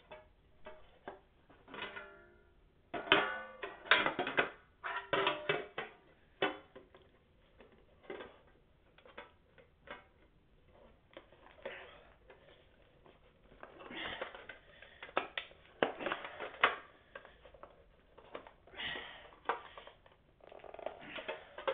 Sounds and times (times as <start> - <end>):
Inside, small room: 0.0 - 21.7.